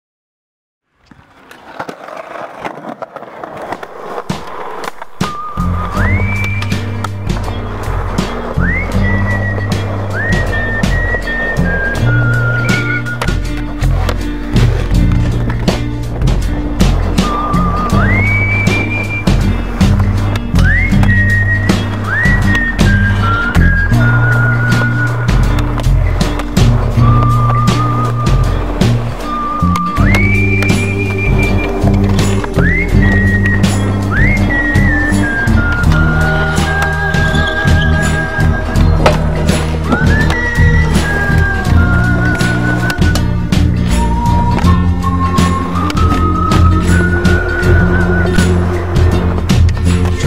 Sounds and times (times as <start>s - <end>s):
Skateboard: 1.0s - 50.2s
Music: 3.5s - 50.2s.